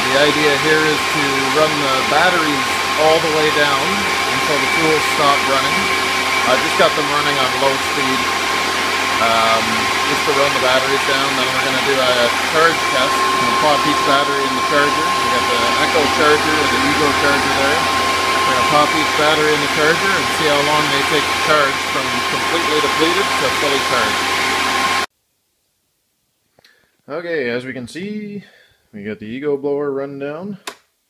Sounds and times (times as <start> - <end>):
Speech: 0.0 - 8.3, 9.2 - 24.2, 27.1 - 30.7.